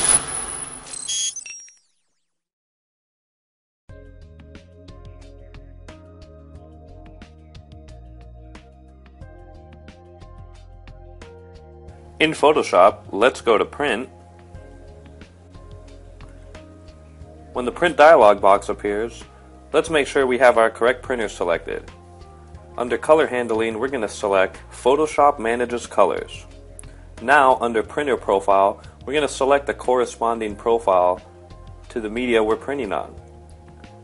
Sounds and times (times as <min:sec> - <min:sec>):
Music: 0:03.9 - 0:34.0
Speech: 0:12.2 - 0:14.1, 0:17.6 - 0:21.9, 0:22.8 - 0:26.5, 0:27.2 - 0:31.3, 0:31.9 - 0:33.2.